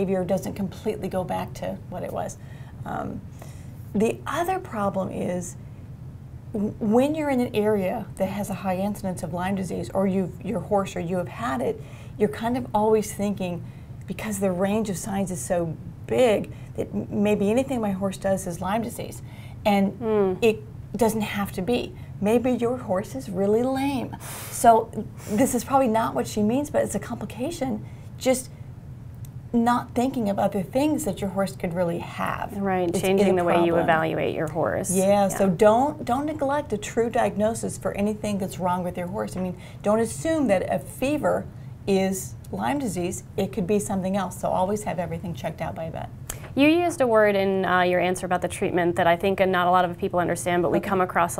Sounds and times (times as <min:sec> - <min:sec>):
Speech: 0:19.7 - 0:28.5, 0:29.6 - 0:51.3.